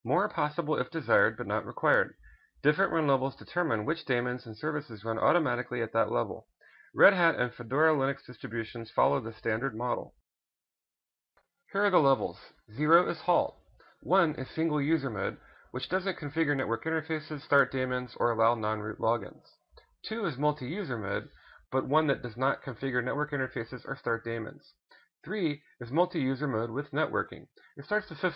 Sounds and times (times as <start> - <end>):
Speech: 0.0 - 10.2, 11.7 - 28.3.